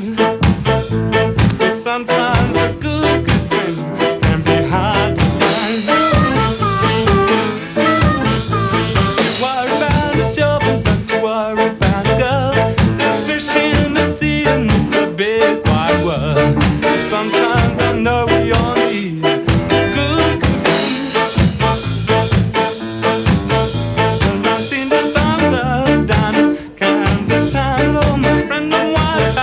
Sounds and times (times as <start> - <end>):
Ska: 0.0 - 29.4.